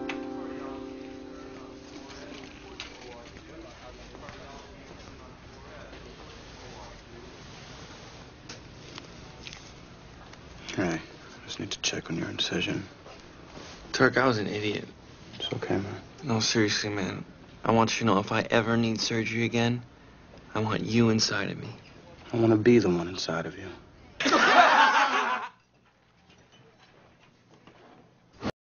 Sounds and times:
Speech: 1.4 - 7.5, 13.9 - 19.9, 20.5 - 23.8.

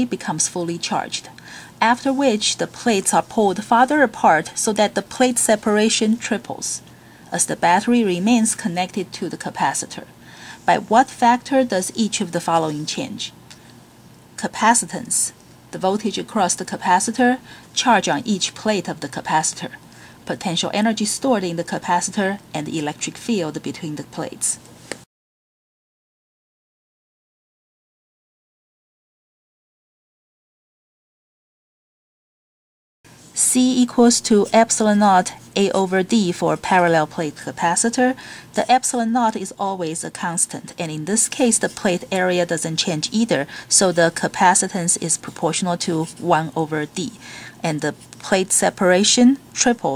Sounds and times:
Speech: 0.0 - 10.1, 10.7 - 13.4, 14.4 - 24.6, 33.4 - 49.9.

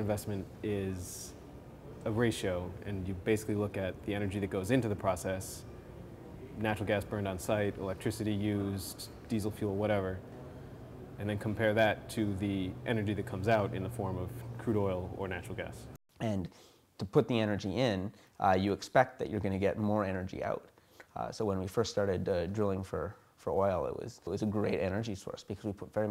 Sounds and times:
Speech: 0.0 - 1.4, 2.0 - 5.7, 6.4 - 10.2, 11.2 - 26.1.

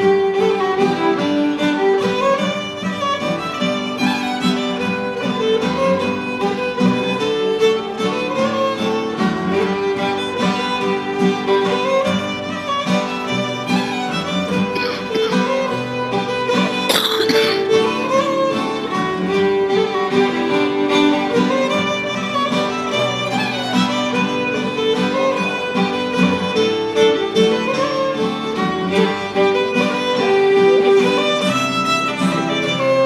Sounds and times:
Violin, fiddle: 0.0 - 33.0.

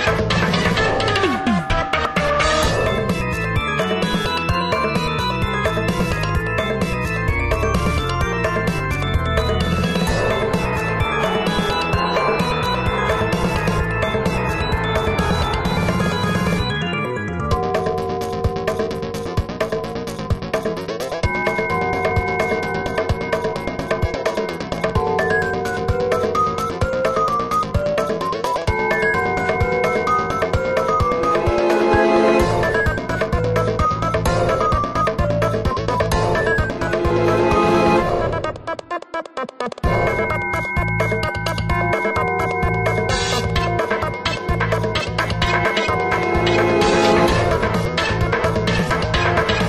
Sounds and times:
Video game music: 0.0 - 49.6.

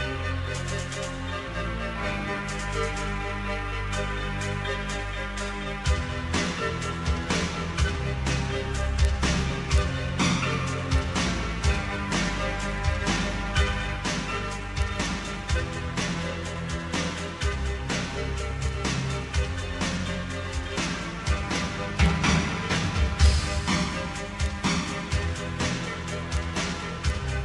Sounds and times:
Music: 0.0 - 27.4.

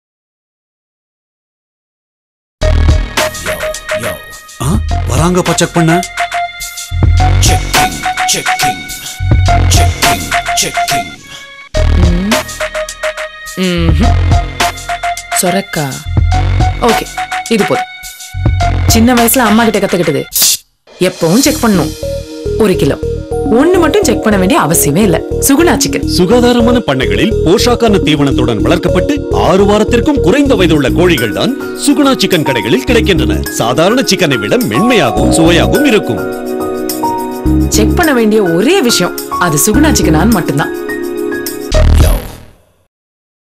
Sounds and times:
Music: 2.6 - 20.3, 20.9 - 42.8
Speech: 3.4 - 6.0, 22.6 - 36.2, 37.8 - 40.7.

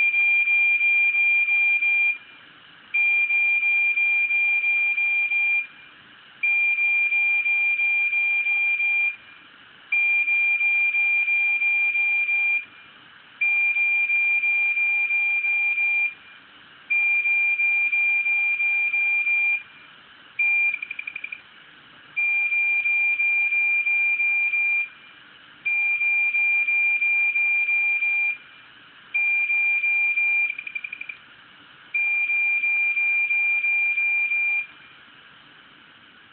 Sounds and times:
Siren: 0.0 - 2.2, 3.0 - 5.7, 6.4 - 9.2, 10.0 - 12.7, 16.9 - 19.6, 25.7 - 28.4.

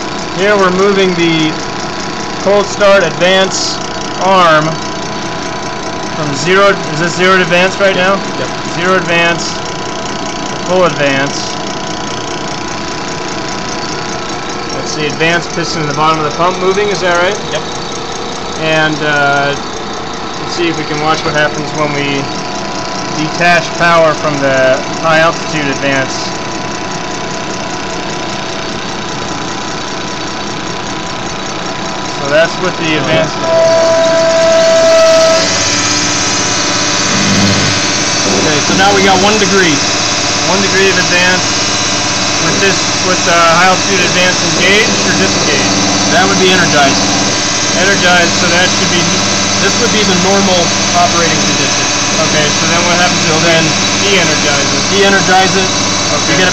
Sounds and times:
Pump (liquid): 0.0 - 56.5.

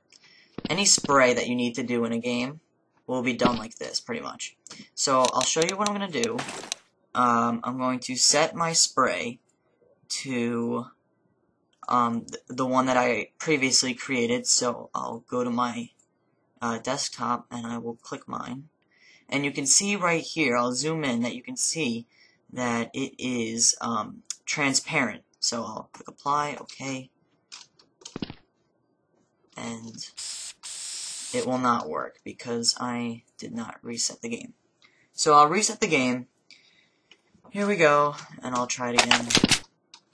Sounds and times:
Speech: 0.6 - 6.5, 7.2 - 9.4, 10.1 - 11.0, 11.8 - 16.0, 16.6 - 18.7, 19.3 - 27.1, 29.6 - 30.3, 31.3 - 34.6, 35.2 - 36.3, 37.5 - 39.5.

